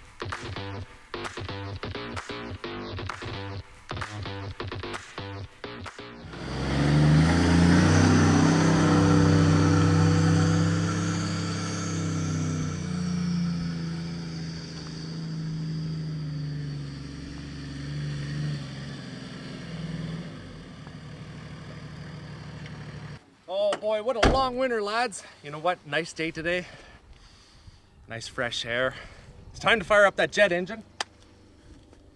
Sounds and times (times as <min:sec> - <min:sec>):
Speech: 0:23.5 - 0:26.7, 0:28.1 - 0:29.0, 0:29.6 - 0:30.9.